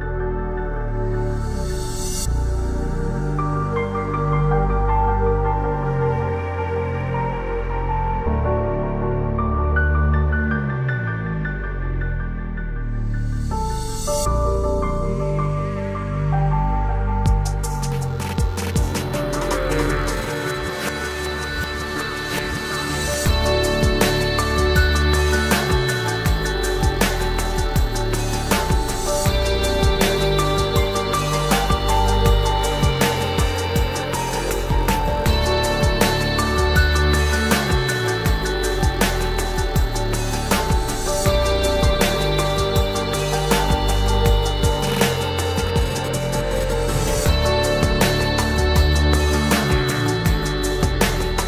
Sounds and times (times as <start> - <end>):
Music: 0.0 - 51.4.